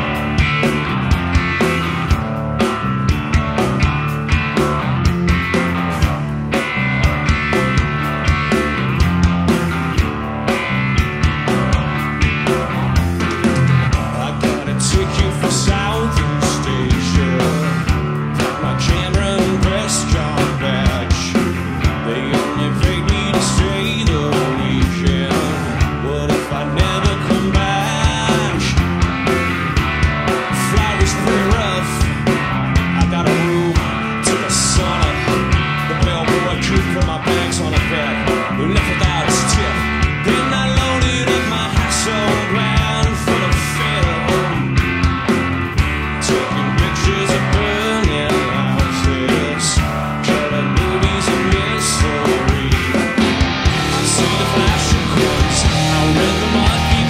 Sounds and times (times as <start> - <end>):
Music: 0.0 - 57.1.